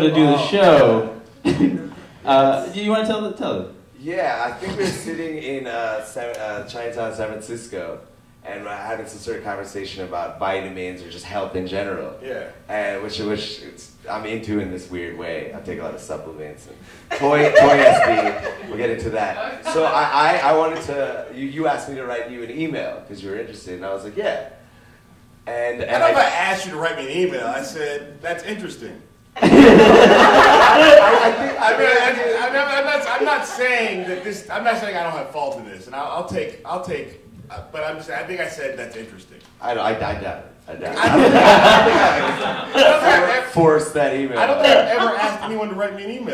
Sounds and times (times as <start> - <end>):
Speech: 2.3 - 24.6, 25.5 - 29.0, 30.8 - 41.2, 41.8 - 46.3.